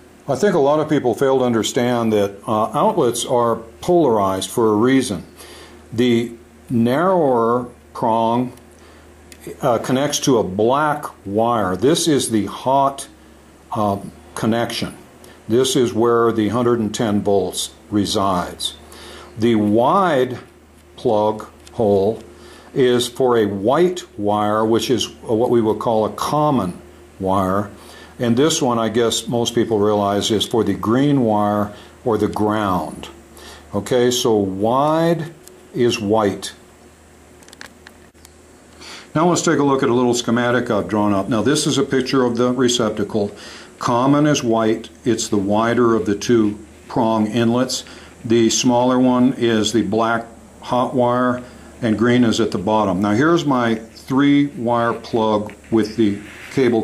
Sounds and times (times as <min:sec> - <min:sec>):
Inside, small room: 0:00.0 - 0:56.8
Speech: 0:00.3 - 0:05.3, 0:05.9 - 0:08.6, 0:09.4 - 0:18.8, 0:19.4 - 0:36.6, 0:39.1 - 0:56.8.